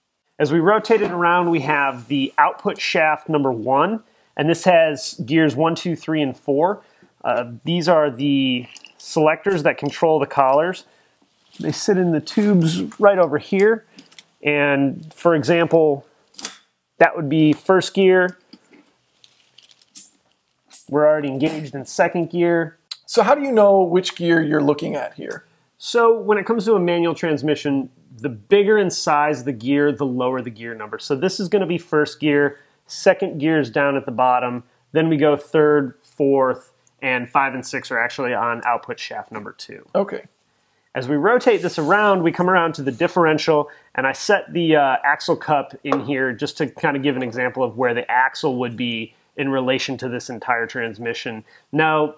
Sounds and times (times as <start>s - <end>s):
Inside, small room: 0.0s - 52.1s
Speech: 0.4s - 10.9s, 11.6s - 16.1s, 17.0s - 18.4s, 20.8s - 40.3s, 41.0s - 52.1s.